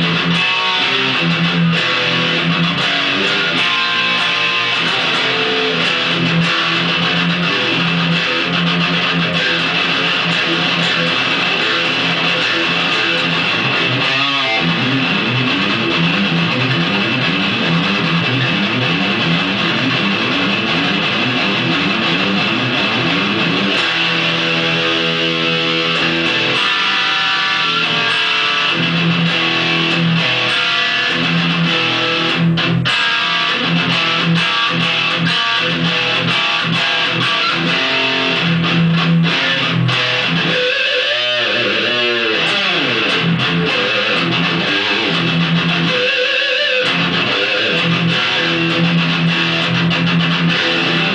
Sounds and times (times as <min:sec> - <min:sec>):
Music: 0:00.0 - 0:51.1.